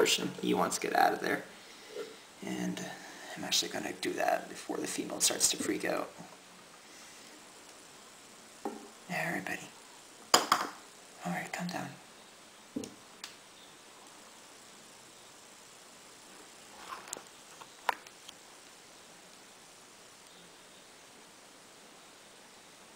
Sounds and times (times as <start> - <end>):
Speech: 0.0 - 1.5, 2.4 - 6.3, 9.1 - 9.7, 11.2 - 12.0
Inside, small room: 0.0 - 22.9.